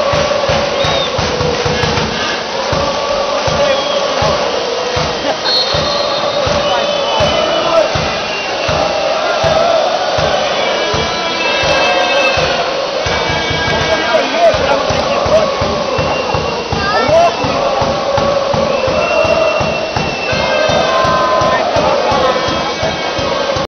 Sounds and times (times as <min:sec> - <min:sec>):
Music: 0:00.0 - 0:23.6
Rain on surface: 0:00.0 - 0:23.6
Speech: 0:02.7 - 0:19.5, 0:20.3 - 0:23.6.